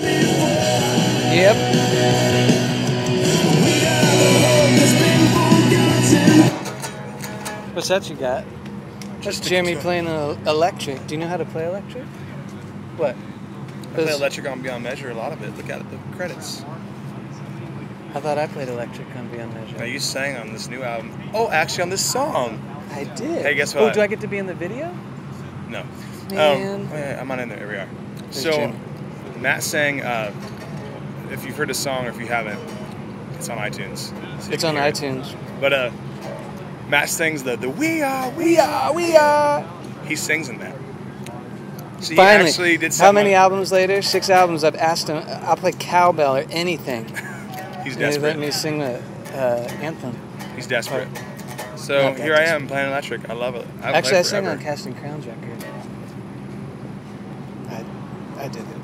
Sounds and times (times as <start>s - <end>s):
Speech: 1.3s - 1.6s, 9.2s - 12.1s, 13.9s - 16.8s, 18.1s - 25.0s, 25.7s - 28.8s, 29.4s - 30.4s, 31.3s - 32.6s, 33.4s - 35.9s, 36.9s - 40.8s, 42.0s - 51.1s, 51.8s - 55.8s.